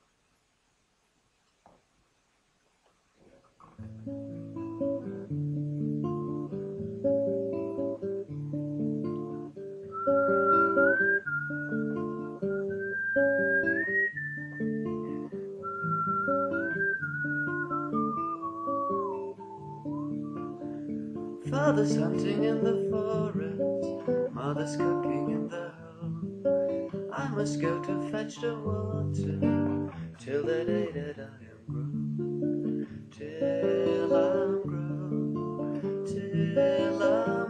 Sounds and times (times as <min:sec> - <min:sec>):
Acoustic guitar: 0:03.2 - 0:37.5.